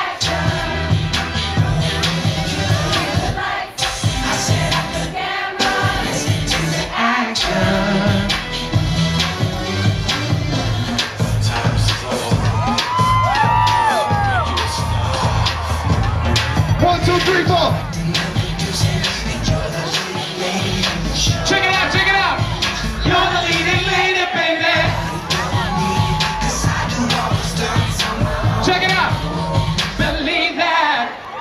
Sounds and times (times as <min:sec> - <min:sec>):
Music: 0:00.0 - 0:31.4
Speech: 0:16.8 - 0:17.7.